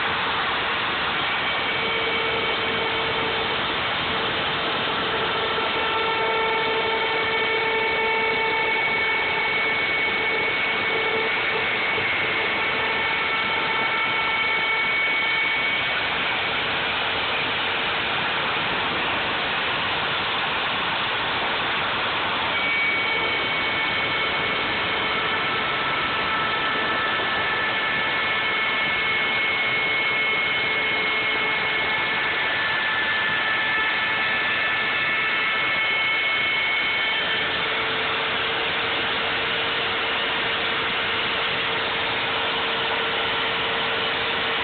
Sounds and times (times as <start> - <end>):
Power tool: 0.0 - 44.6.